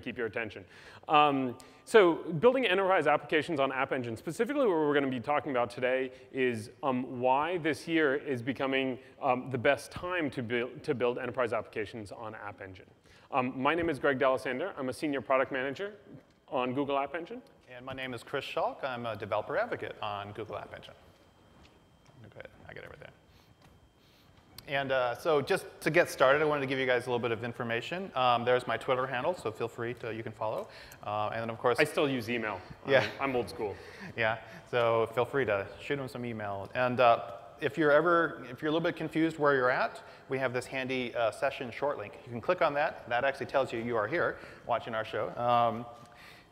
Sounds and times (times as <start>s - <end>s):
Speech: 0.0s - 21.0s, 22.2s - 23.2s, 24.6s - 45.9s.